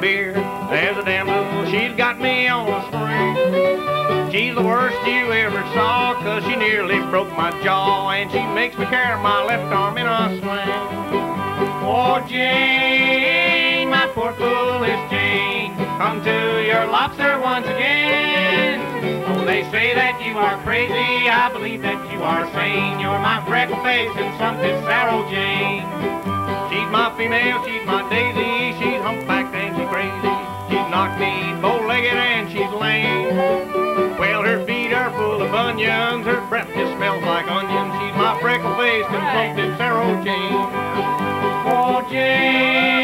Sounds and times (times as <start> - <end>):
Violin, fiddle: 0.0 - 43.0.